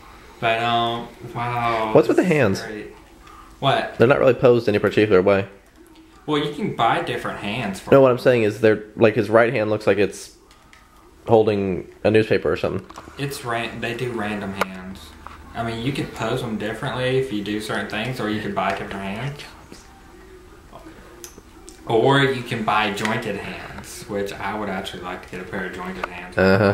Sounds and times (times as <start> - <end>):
Inside, small room: 0.0 - 26.7.